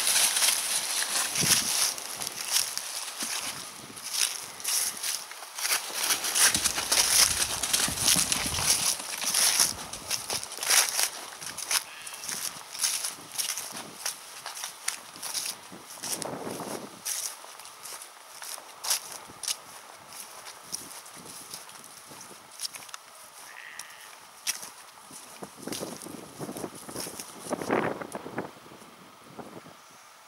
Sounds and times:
Sheep: 0.0s - 13.8s, 20.5s - 25.3s.

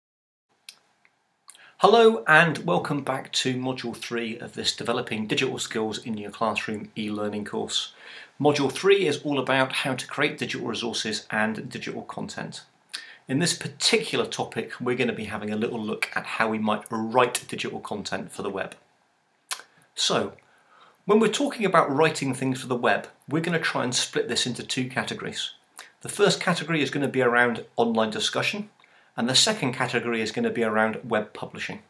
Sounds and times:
Speech: 1.5s - 18.8s, 19.5s - 20.4s, 21.1s - 31.8s.

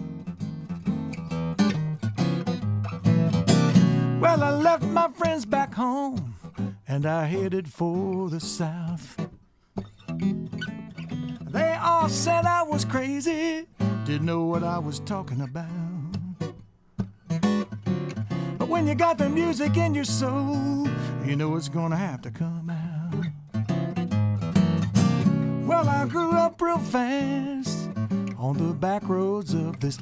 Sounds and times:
Acoustic guitar: 0.0s - 30.0s.

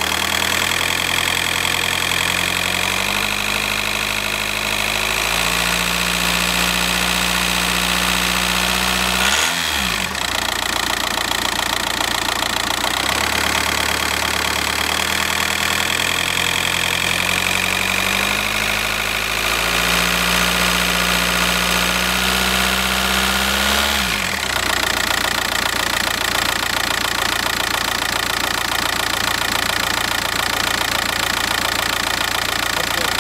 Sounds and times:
Car: 0.0s - 33.2s
Outside, urban or manmade: 0.0s - 33.2s.

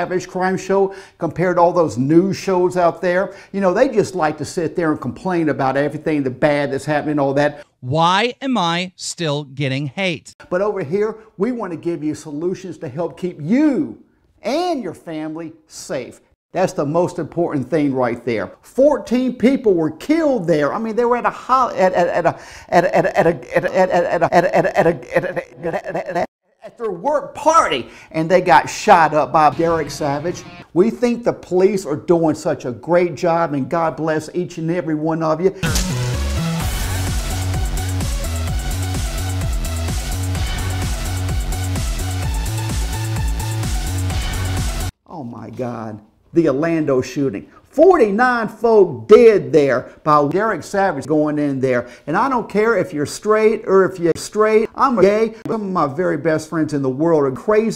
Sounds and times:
Speech: 0.0s - 25.0s, 26.6s - 35.6s, 45.1s - 57.7s.

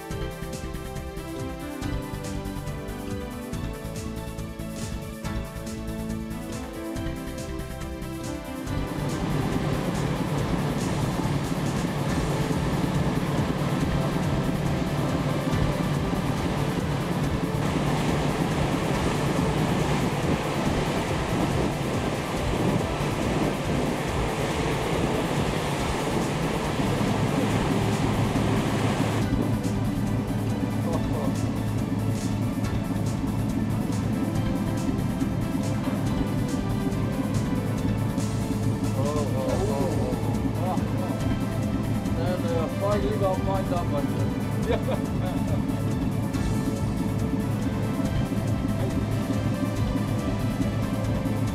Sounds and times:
Waves, surf: 0.0s - 51.5s
Wind noise (microphone): 9.2s - 29.8s.

